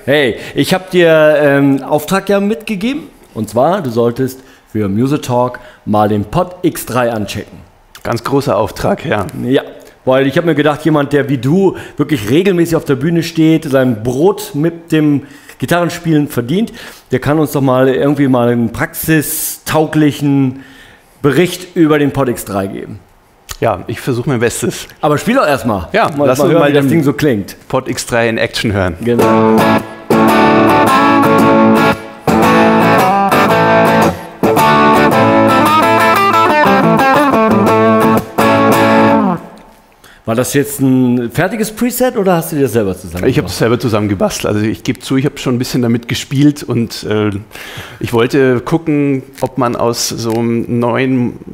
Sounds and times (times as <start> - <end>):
Speech: 0.0 - 20.6, 21.2 - 29.3, 40.3 - 51.5.